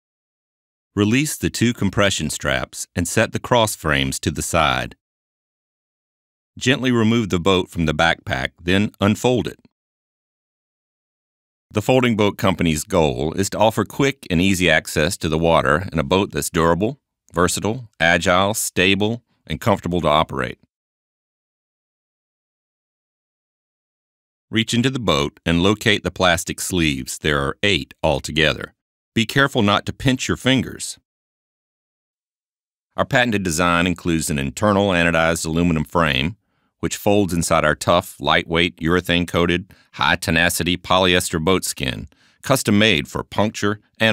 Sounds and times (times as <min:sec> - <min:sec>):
Speech: 0:01.0 - 0:05.0, 0:06.6 - 0:09.7, 0:11.7 - 0:20.7, 0:24.5 - 0:31.0, 0:33.0 - 0:44.1.